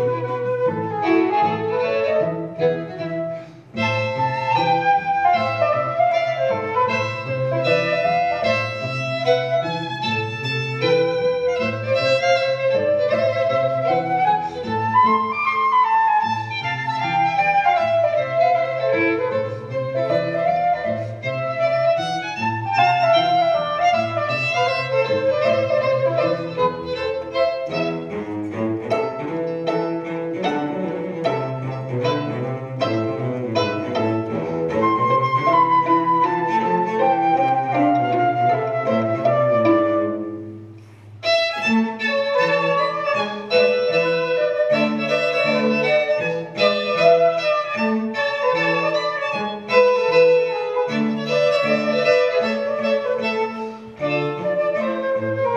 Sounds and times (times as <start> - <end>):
Violin, fiddle: 0.0 - 40.3, 41.2 - 55.5.